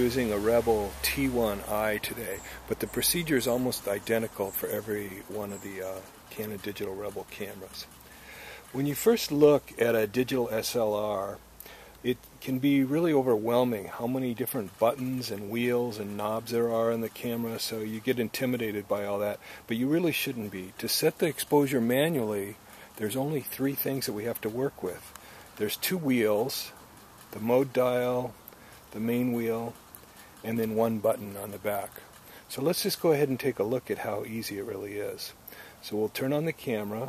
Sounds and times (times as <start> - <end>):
Speech: 0.0 - 7.9, 8.7 - 11.4, 12.0 - 29.8, 30.4 - 37.0.